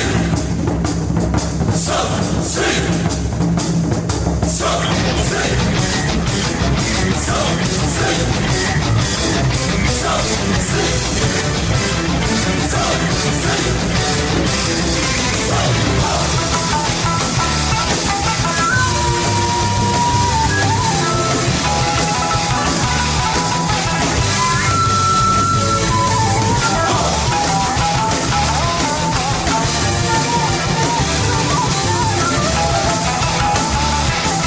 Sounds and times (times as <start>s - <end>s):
Music: 0.0s - 34.4s.